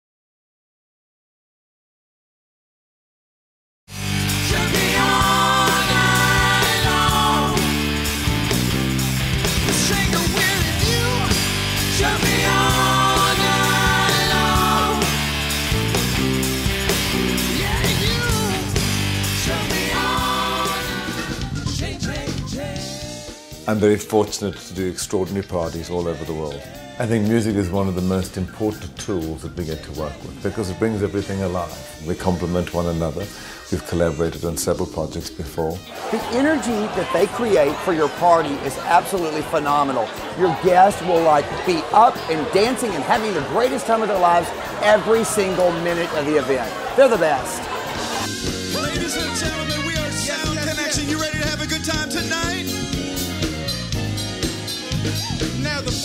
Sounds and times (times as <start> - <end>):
Music: 3.9 - 56.0
Crowd: 4.3 - 23.3, 23.9 - 56.0
Speech: 23.7 - 47.6.